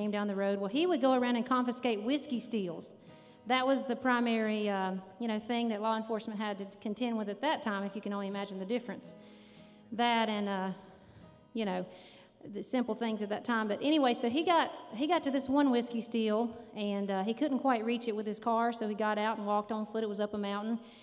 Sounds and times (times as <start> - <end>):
Speech: 0.0 - 2.9, 3.5 - 9.1, 10.0 - 10.8, 11.6 - 11.9, 12.5 - 20.8
Music: 0.0 - 21.0.